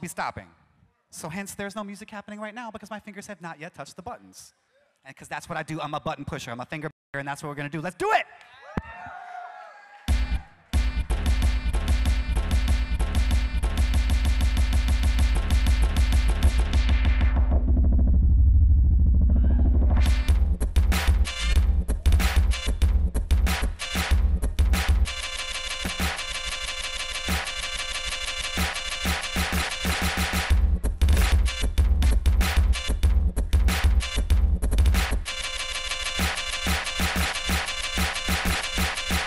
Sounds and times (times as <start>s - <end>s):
Music: 10.1s - 39.2s.